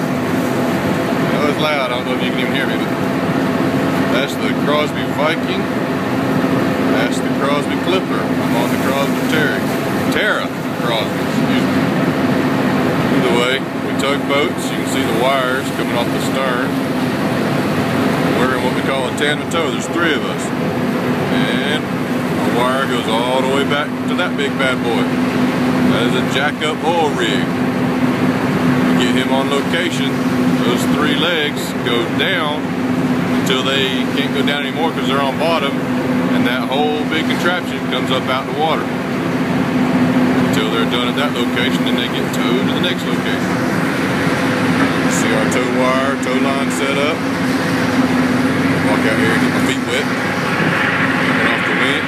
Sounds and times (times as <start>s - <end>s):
Motorboat, speedboat: 0.0s - 52.0s
Speech: 1.3s - 3.0s, 4.0s - 5.8s, 6.9s - 11.9s, 13.1s - 16.9s, 18.2s - 20.6s, 21.3s - 25.2s, 25.8s - 27.6s, 28.9s - 32.7s, 33.4s - 38.9s, 40.4s - 43.6s, 45.0s - 47.3s, 48.7s - 50.2s, 51.3s - 52.0s.